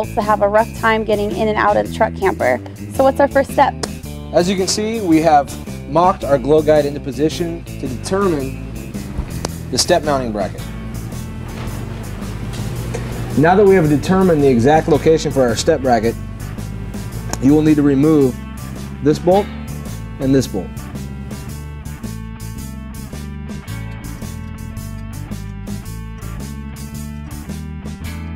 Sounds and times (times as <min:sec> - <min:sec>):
Music: 0:00.0 - 0:28.3
Speech: 0:09.7 - 0:10.6, 0:13.4 - 0:16.2, 0:17.4 - 0:18.4, 0:19.0 - 0:19.5, 0:20.2 - 0:20.7.